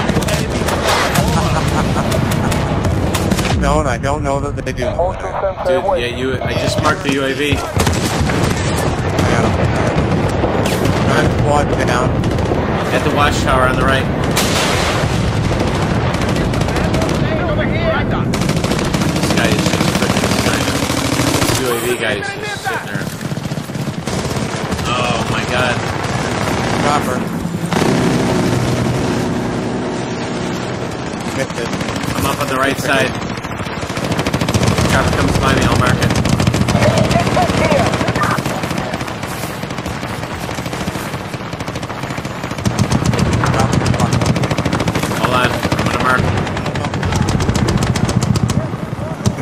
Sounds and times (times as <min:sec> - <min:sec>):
Speech: 0:03.6 - 0:07.8.